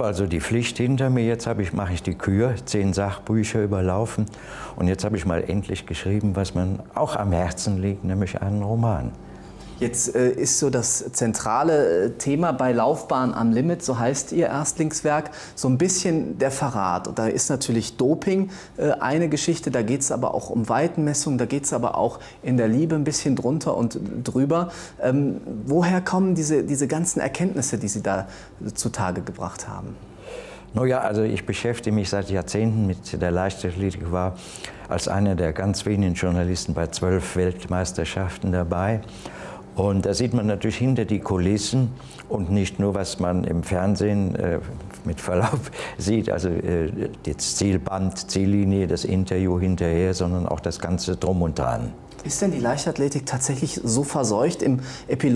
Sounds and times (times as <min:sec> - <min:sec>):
Speech: 0:00.0 - 0:09.2, 0:09.8 - 0:30.0, 0:30.7 - 0:39.1, 0:39.8 - 0:55.3
Inside, small room: 0:00.0 - 0:55.3.